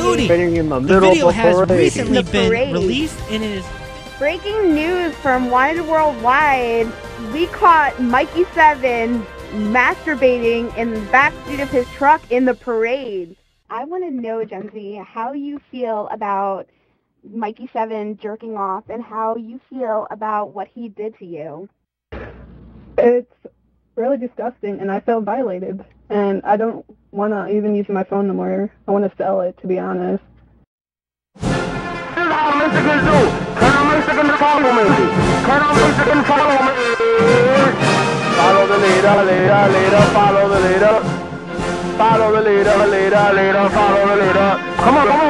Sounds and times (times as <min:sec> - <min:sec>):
Music: 0:00.0 - 0:13.6, 0:31.4 - 0:45.2
Speech: 0:00.0 - 0:16.6, 0:17.3 - 0:21.7, 0:23.0 - 0:30.2, 0:32.2 - 0:41.0, 0:42.0 - 0:45.2.